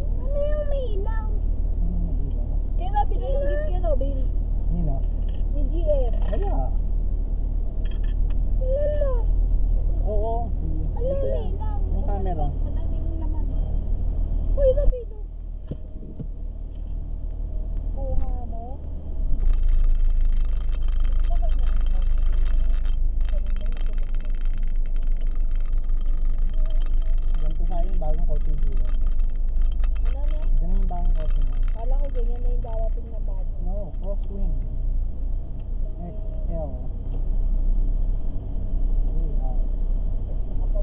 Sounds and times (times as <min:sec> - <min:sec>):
Vehicle: 0:00.0 - 0:40.8
Speech: 0:10.0 - 0:13.4.